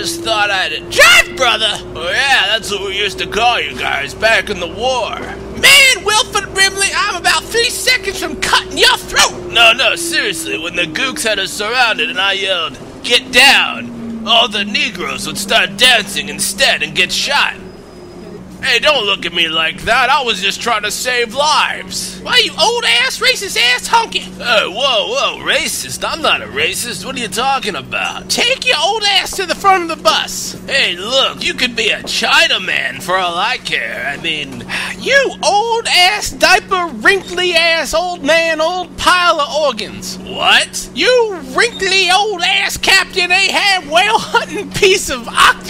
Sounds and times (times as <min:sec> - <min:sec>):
Speech: 0:00.0 - 0:17.6, 0:18.6 - 0:45.6
Vehicle: 0:00.0 - 0:45.6.